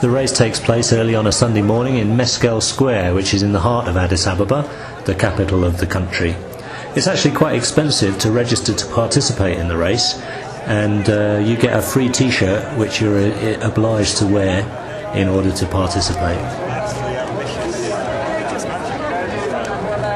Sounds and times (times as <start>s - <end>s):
Speech: 0.0s - 20.1s.